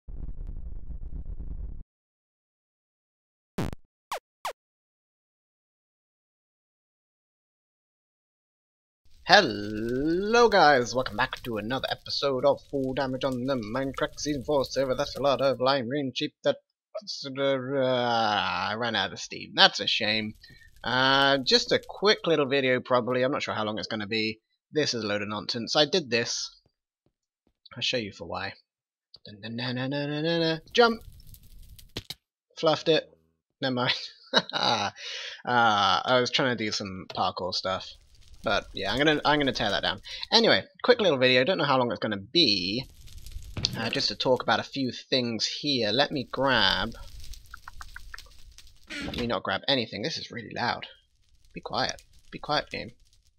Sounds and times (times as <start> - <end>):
Speech: 9.3 - 26.5, 27.7 - 28.6, 29.2 - 31.0, 32.6 - 37.9, 38.5 - 42.8, 43.7 - 47.0, 48.9 - 50.9, 51.6 - 52.9.